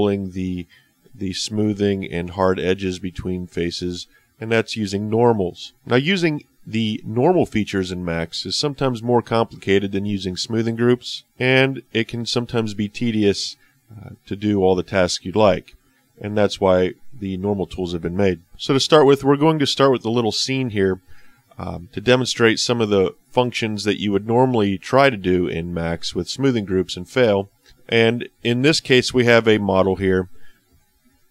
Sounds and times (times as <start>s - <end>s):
Speech: 0.0s - 30.4s.